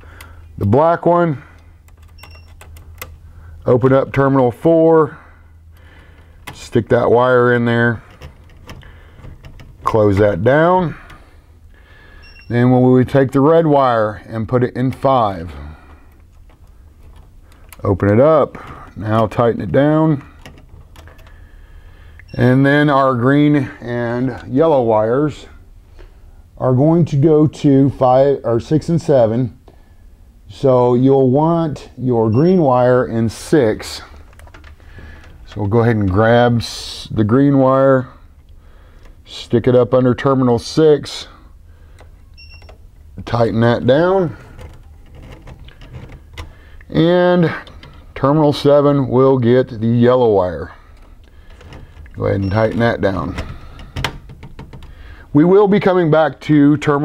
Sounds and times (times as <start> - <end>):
Speech: 0.6 - 1.5, 3.6 - 5.2, 6.6 - 8.1, 9.9 - 11.1, 12.5 - 15.8, 17.8 - 20.3, 22.4 - 25.6, 26.6 - 29.6, 30.5 - 34.1, 35.5 - 38.2, 39.3 - 41.4, 43.2 - 44.4, 46.9 - 50.8, 52.2 - 53.5, 55.3 - 57.0.